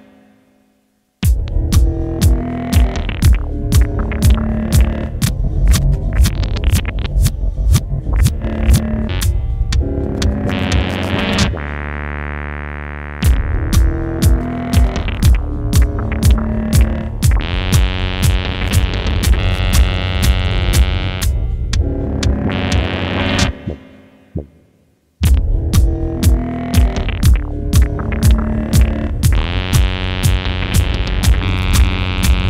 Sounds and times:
Music: 0.0s - 32.5s
Throbbing: 1.2s - 32.5s.

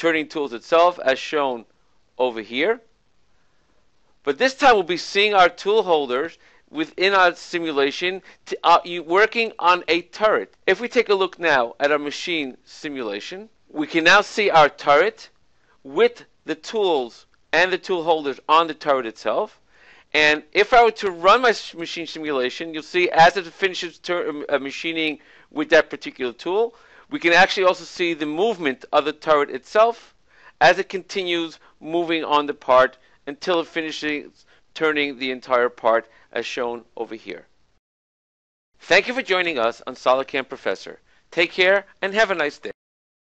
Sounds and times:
Speech: 0.0s - 2.9s, 4.3s - 15.3s, 15.9s - 37.5s, 38.8s - 42.8s.

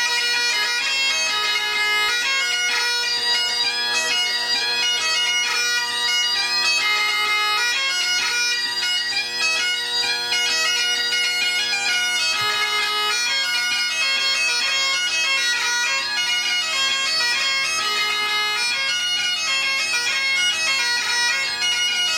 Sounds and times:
Bagpipes: 0.0s - 22.1s
Wind instrument, woodwind instrument: 0.0s - 22.1s.

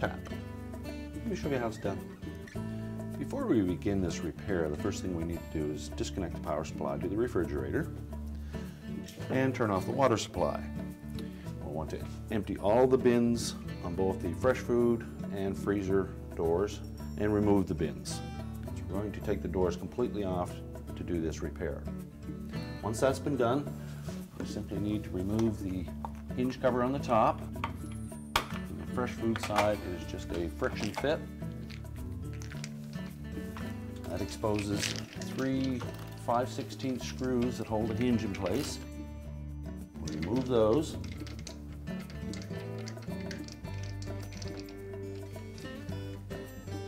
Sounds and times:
Speech: 0.0s - 0.3s, 1.2s - 2.2s, 3.2s - 7.9s, 9.2s - 10.7s, 11.6s - 18.2s, 18.8s - 21.9s, 22.8s - 23.7s, 24.4s - 27.4s, 28.7s - 31.3s, 34.1s - 38.8s, 40.0s - 41.0s
Music: 0.0s - 46.8s.

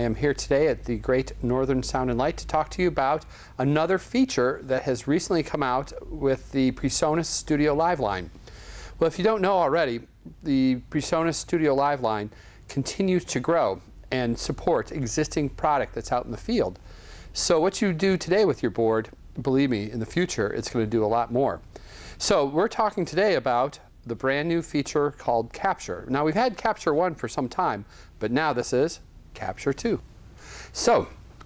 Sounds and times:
Speech: 0.0s - 8.3s, 9.0s - 16.8s, 17.4s - 21.6s, 22.2s - 30.0s, 30.8s - 31.2s.

